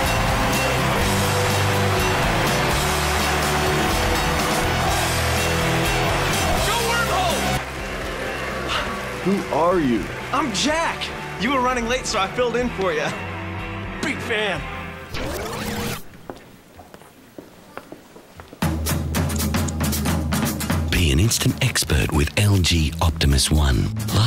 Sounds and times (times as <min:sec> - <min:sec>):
Music: 0:00.0 - 0:16.0, 0:18.6 - 0:24.2
Male speech, man speaking: 0:06.6 - 0:07.6, 0:09.3 - 0:13.2, 0:14.0 - 0:14.6, 0:20.9 - 0:24.2.